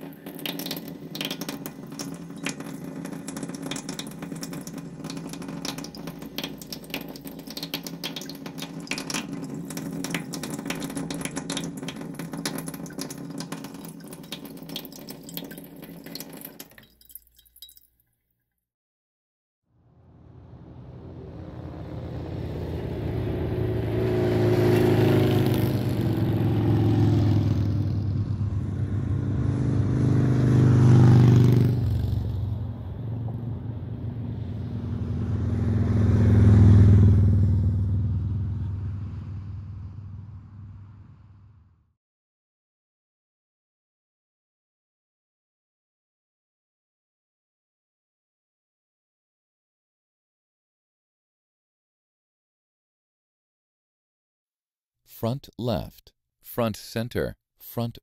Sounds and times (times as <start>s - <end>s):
Motor vehicle (road): 19.7s - 42.0s.